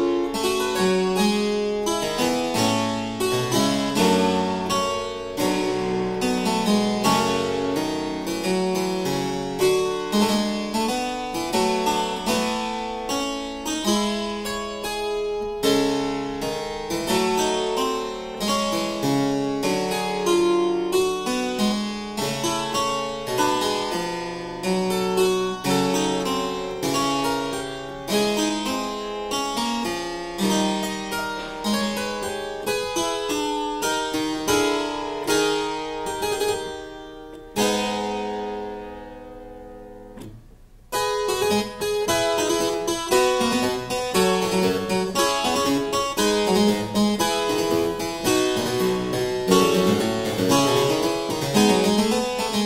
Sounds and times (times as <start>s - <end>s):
Piano: 0.0s - 52.6s.